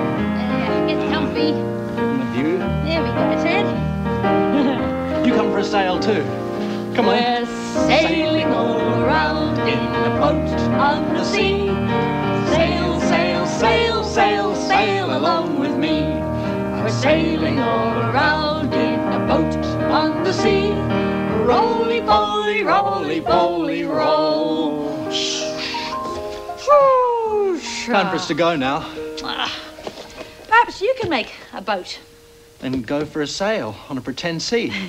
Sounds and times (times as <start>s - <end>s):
Music: 0.0s - 34.8s.